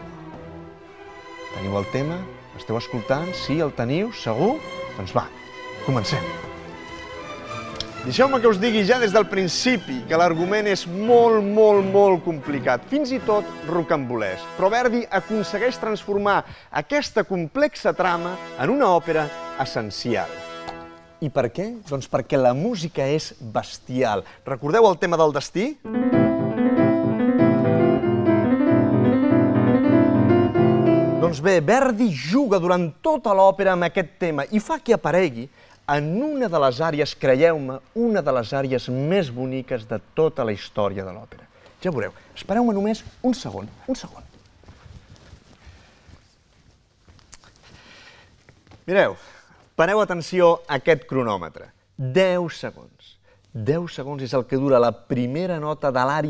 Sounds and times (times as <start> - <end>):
Music: 0.0 - 16.7, 17.7 - 21.5, 25.8 - 32.3
Speech: 1.6 - 6.4, 8.0 - 20.3, 21.2 - 25.8, 31.2 - 44.3, 48.9 - 49.2, 49.8 - 56.3.